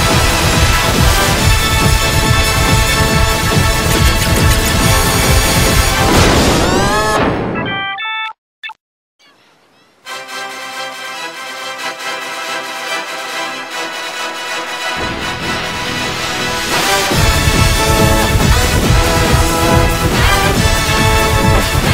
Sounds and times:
Music: 0:00.0 - 0:08.4, 0:10.0 - 0:21.9.

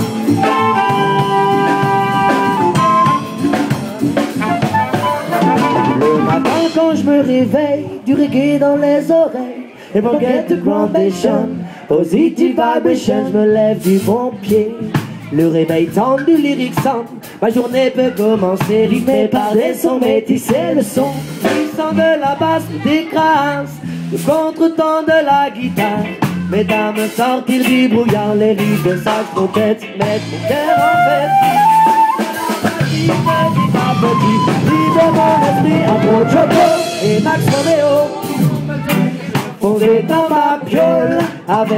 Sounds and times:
Funk: 0:00.0 - 0:09.0, 0:10.0 - 0:41.7
Jazz: 0:00.0 - 0:09.2, 0:10.0 - 0:41.7.

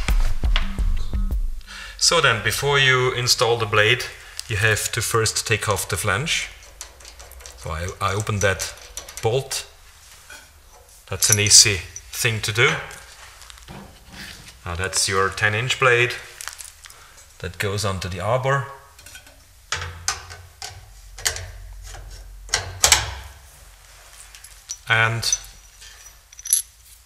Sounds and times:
Speech: 0:02.0 - 0:06.6, 0:07.6 - 0:09.8, 0:11.1 - 0:13.1, 0:14.6 - 0:16.4, 0:17.4 - 0:18.9, 0:24.9 - 0:25.5.

